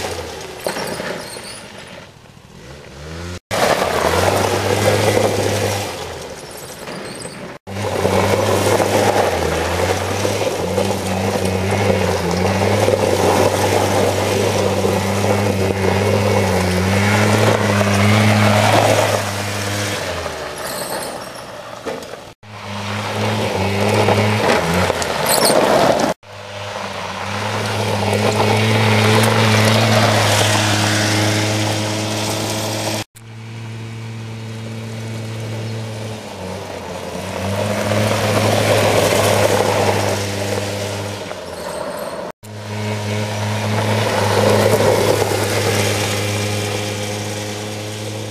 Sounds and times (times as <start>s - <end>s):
Motorcycle: 0.0s - 48.3s
Outside, rural or natural: 0.0s - 48.3s.